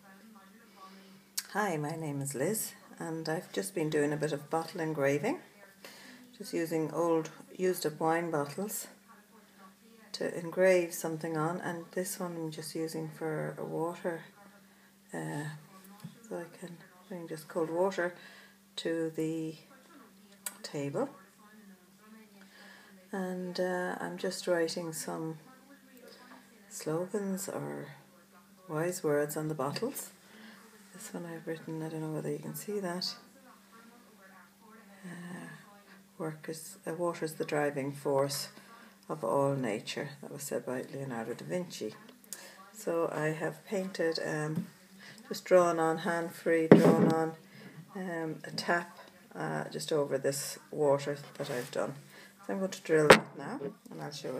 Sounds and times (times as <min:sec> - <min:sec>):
Speech: 0:00.0 - 0:54.3
Breathing: 0:00.7 - 0:01.4, 0:05.8 - 0:06.3, 0:14.7 - 0:15.0, 0:18.2 - 0:18.7, 0:22.4 - 0:23.0, 0:30.2 - 0:30.8, 0:38.6 - 0:39.0, 0:42.3 - 0:42.8, 0:45.0 - 0:45.3, 0:47.4 - 0:47.9, 0:52.0 - 0:52.4.